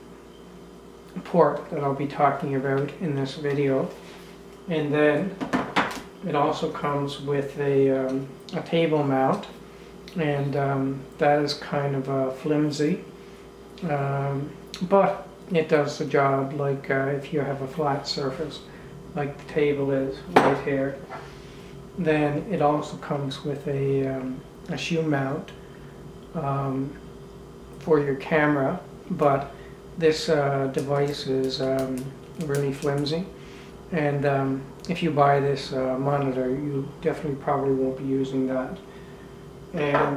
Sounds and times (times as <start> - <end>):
Inside, small room: 0.0 - 40.1
Speech: 1.1 - 4.0, 4.7 - 5.4, 6.2 - 13.1, 13.8 - 21.1, 22.0 - 25.6, 26.4 - 27.0, 27.8 - 38.8, 39.7 - 40.1.